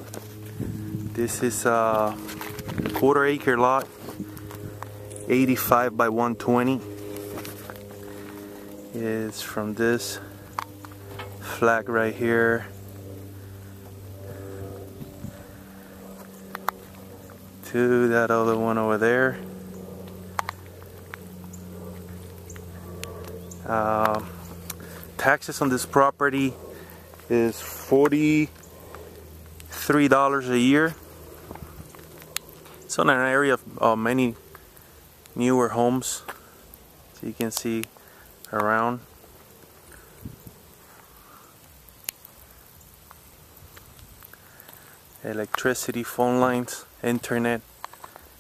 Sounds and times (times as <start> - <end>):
Outside, rural or natural: 0.0 - 48.4
Speech: 1.2 - 2.3, 3.0 - 3.9, 5.3 - 6.9, 9.0 - 10.3, 11.4 - 12.8, 17.6 - 19.4, 23.7 - 24.3, 25.2 - 26.6, 27.3 - 28.5, 29.7 - 31.0, 32.9 - 34.4, 35.4 - 36.3, 37.2 - 37.9, 38.5 - 39.0, 45.2 - 47.6.